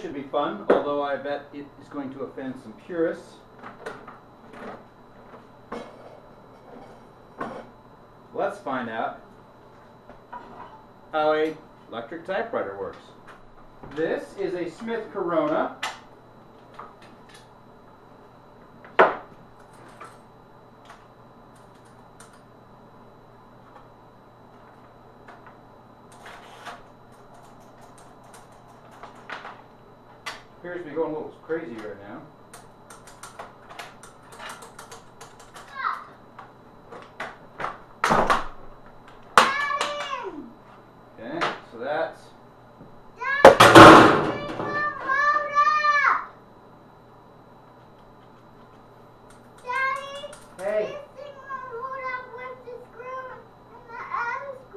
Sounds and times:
Typewriter: 0:32.9 - 0:35.7.

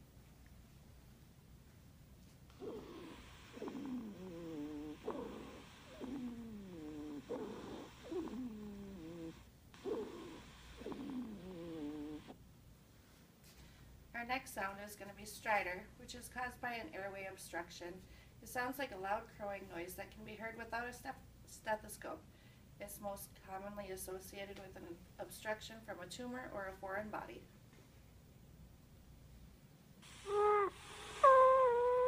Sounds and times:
Speech: 0:14.2 - 0:27.5.

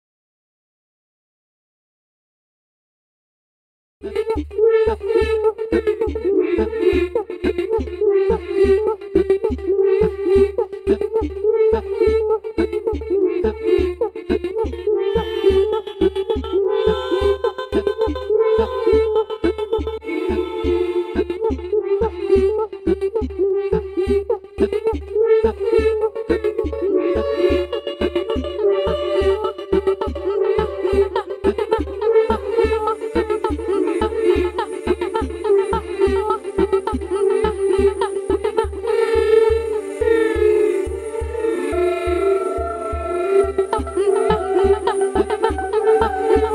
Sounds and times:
Music: 0:04.0 - 0:46.5.

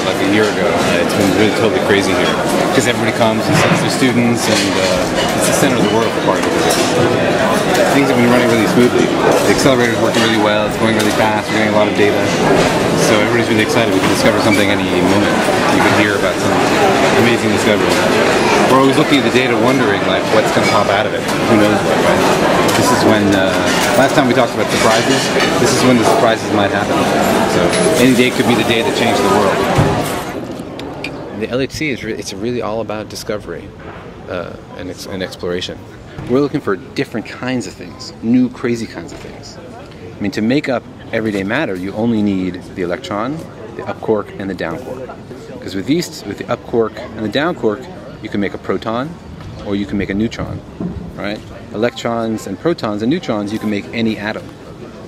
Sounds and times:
Speech: 0:00.0 - 0:30.0, 0:31.3 - 0:54.6
Inside, public space: 0:00.0 - 0:55.0.

